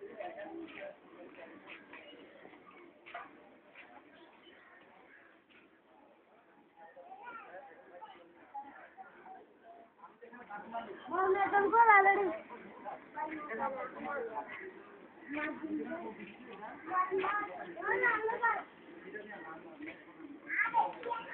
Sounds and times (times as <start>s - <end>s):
Speech: 0.0s - 21.3s.